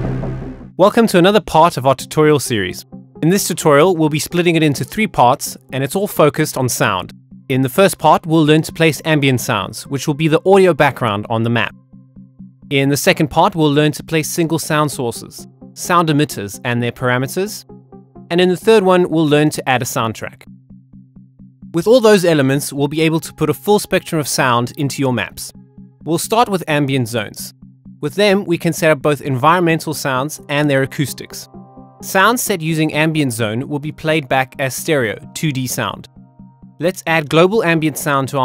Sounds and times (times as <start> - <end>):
Music: 0.0 - 38.4
Speech: 0.8 - 11.7, 12.7 - 17.6, 18.3 - 20.5, 21.8 - 25.5, 26.1 - 36.1, 36.8 - 38.4.